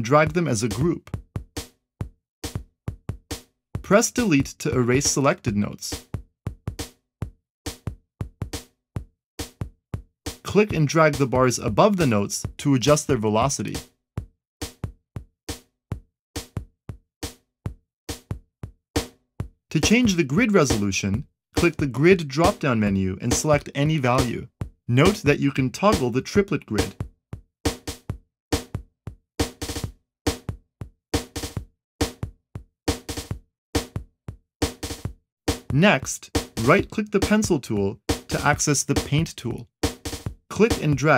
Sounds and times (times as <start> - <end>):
Speech: 0.0 - 1.1, 3.9 - 6.0, 10.5 - 13.8, 19.7 - 27.0, 35.7 - 39.7, 40.5 - 41.1
Music: 0.0 - 41.1.